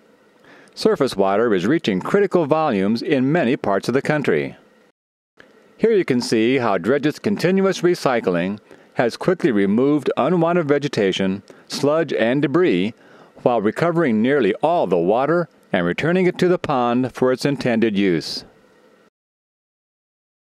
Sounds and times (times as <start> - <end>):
Speech: 0.8 - 4.6, 5.8 - 18.5.